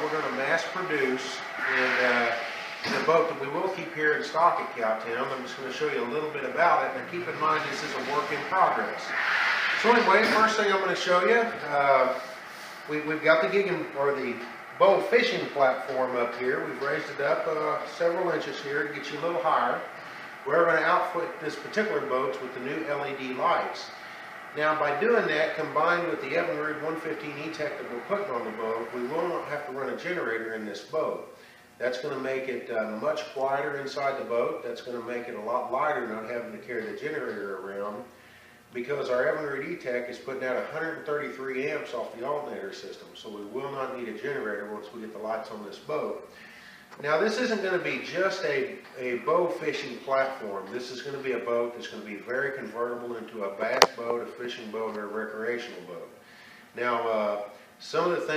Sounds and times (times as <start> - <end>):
Speech: 0.0 - 12.2, 12.8 - 46.3, 47.0 - 58.3.